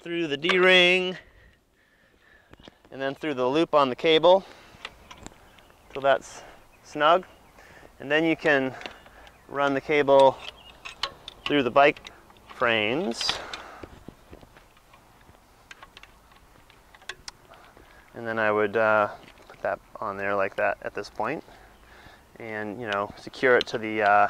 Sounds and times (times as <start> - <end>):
Speech: 0.0 - 1.2, 2.9 - 4.4, 6.0 - 7.3, 8.0 - 8.8, 9.5 - 10.4, 11.5 - 12.0, 18.2 - 21.5, 22.4 - 24.3.